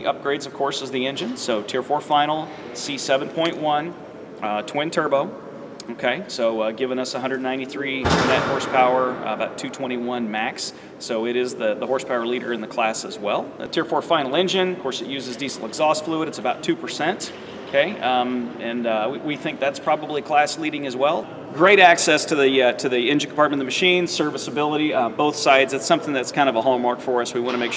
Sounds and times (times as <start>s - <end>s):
Speech: 0.0s - 27.7s.